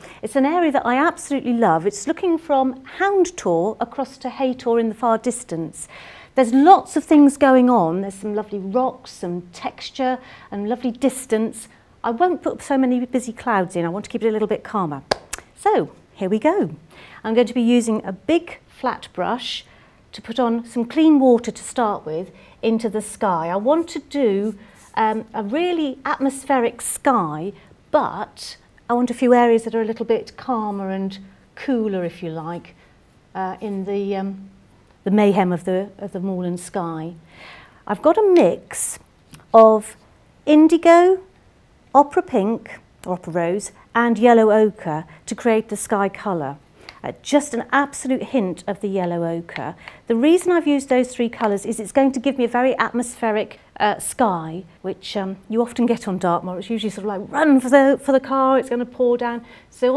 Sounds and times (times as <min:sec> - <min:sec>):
Speech: 0:00.2 - 0:37.2, 0:37.9 - 0:41.3, 0:42.0 - 0:59.9.